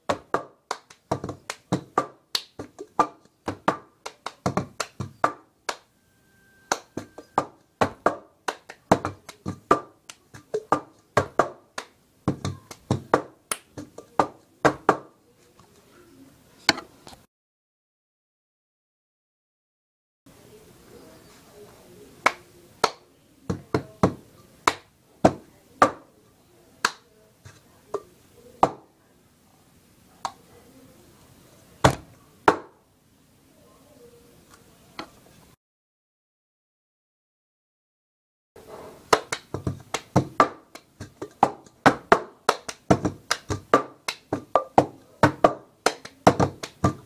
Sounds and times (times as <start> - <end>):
Inside, small room: 20.3 - 35.6, 38.6 - 47.0.